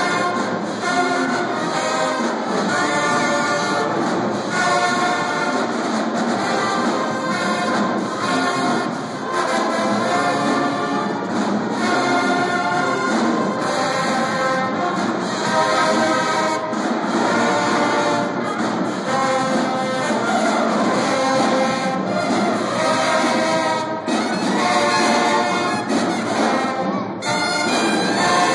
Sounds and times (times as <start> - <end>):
Music: 0.0 - 28.5.